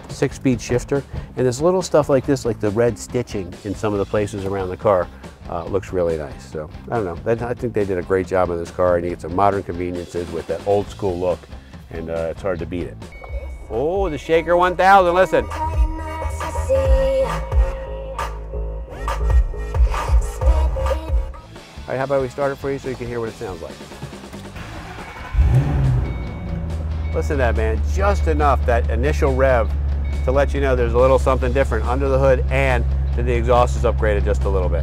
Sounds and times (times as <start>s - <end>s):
Music: 0.0s - 34.8s
Speech: 0.1s - 13.0s, 13.7s - 15.5s, 21.9s - 23.8s, 27.2s - 29.7s, 30.3s - 34.8s.